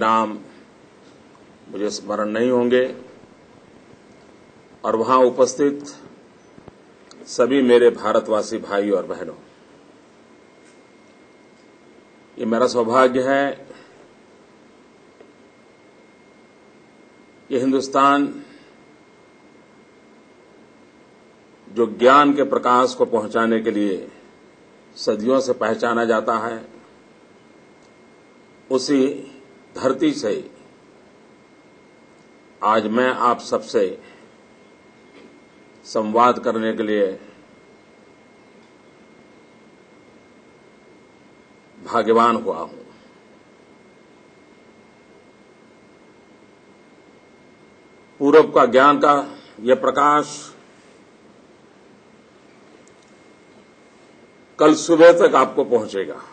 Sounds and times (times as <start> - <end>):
Male speech, man speaking: 0.0 - 0.6, 1.7 - 3.1, 4.8 - 6.1, 7.2 - 9.5, 12.4 - 13.7, 17.5 - 18.5, 21.7 - 24.2, 25.0 - 26.8, 28.7 - 30.6, 32.6 - 34.1, 35.8 - 37.4, 41.8 - 42.9, 48.2 - 50.6, 54.6 - 56.3
Narration, monologue: 0.0 - 56.3.